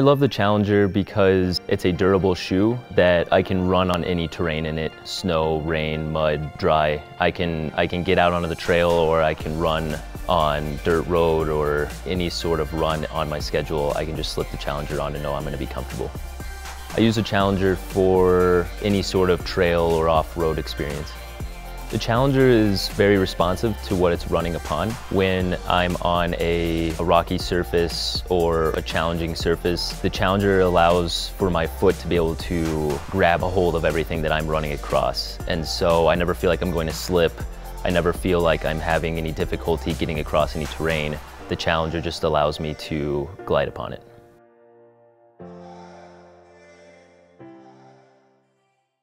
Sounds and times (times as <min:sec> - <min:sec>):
Speech: 0:00.0 - 0:16.2, 0:17.0 - 0:21.2, 0:21.9 - 0:44.1
Music: 0:00.0 - 0:49.0.